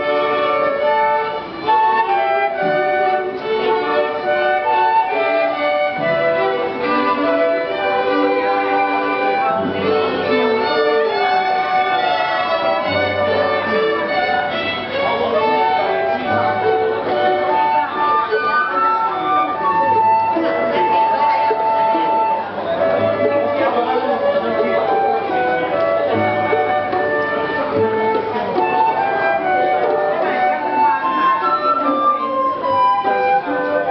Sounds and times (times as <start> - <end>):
Music: 0.0 - 33.9.